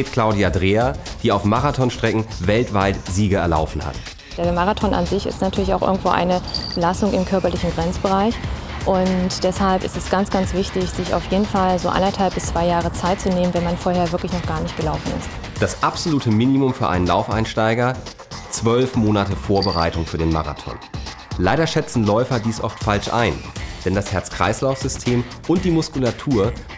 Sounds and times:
Speech: 0:00.0 - 0:20.8, 0:21.4 - 0:26.6
Music: 0:00.0 - 0:26.7
Outside, rural or natural: 0:05.3 - 0:07.9.

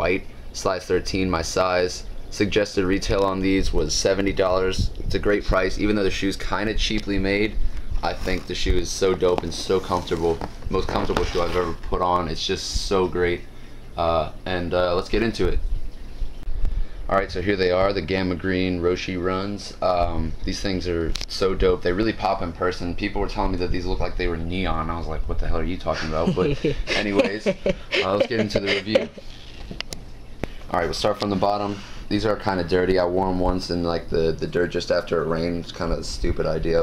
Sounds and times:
Speech: 0:00.0 - 0:15.6, 0:17.1 - 0:29.2, 0:30.7 - 0:36.8.

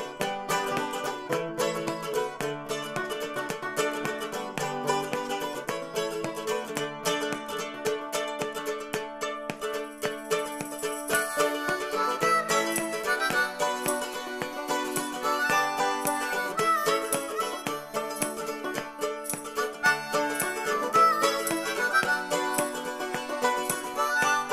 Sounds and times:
Banjo: 0:00.0 - 0:24.5.

